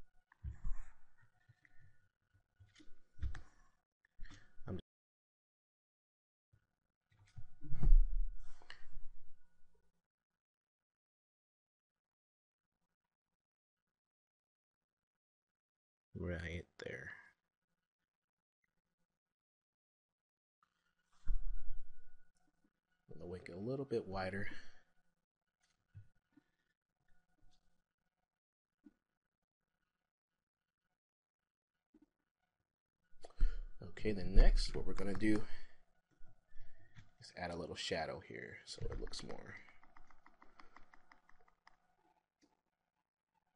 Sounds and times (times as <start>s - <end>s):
Computer keyboard: 39.0s - 41.8s.